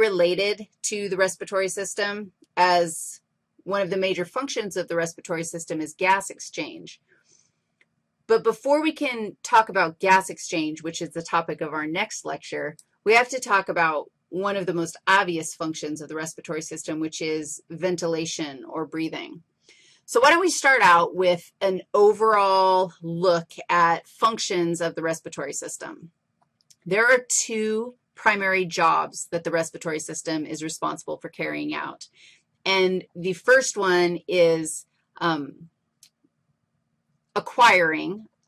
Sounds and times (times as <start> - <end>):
Speech: 0.0 - 7.0, 8.3 - 19.4, 20.1 - 26.1, 26.8 - 32.1, 32.7 - 35.6, 37.4 - 38.2.